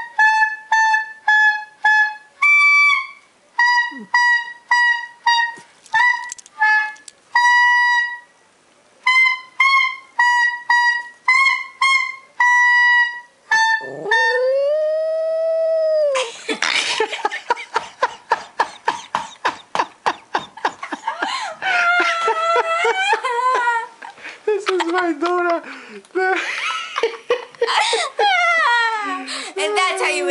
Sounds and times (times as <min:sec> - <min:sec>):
Whimper (dog): 0:13.6 - 0:16.3
Howl: 0:13.7 - 0:16.3.